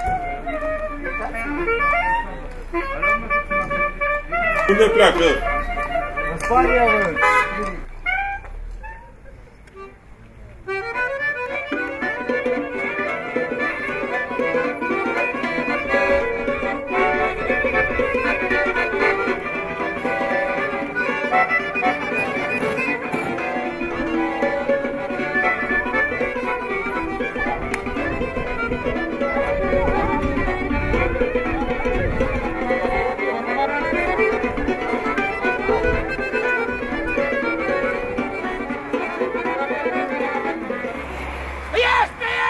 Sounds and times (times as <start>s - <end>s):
Music: 0.0s - 9.1s, 9.7s - 41.0s
Outside, urban or manmade: 0.0s - 42.4s.